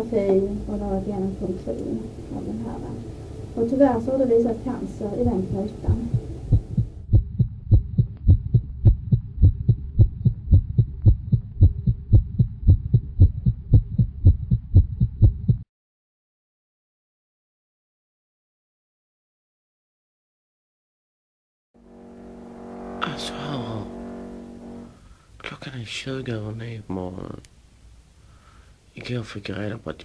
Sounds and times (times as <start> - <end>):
Speech: 0.0 - 3.0, 3.6 - 6.2, 23.0 - 24.0, 25.4 - 27.5, 29.0 - 30.0.